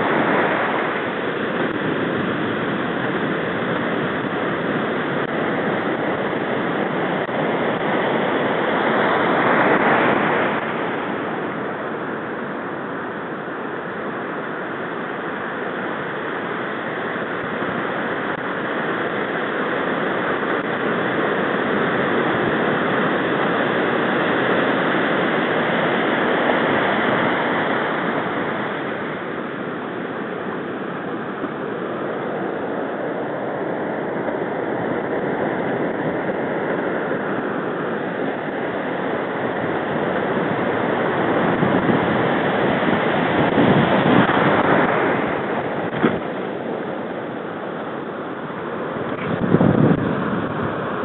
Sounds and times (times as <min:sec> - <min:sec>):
Waves, surf: 0:00.0 - 0:51.0.